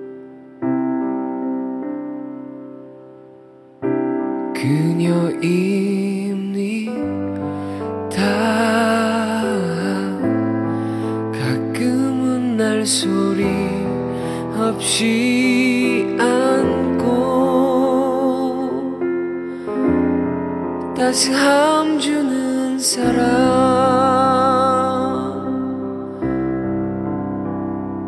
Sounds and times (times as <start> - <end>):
Music: 0.0 - 28.0.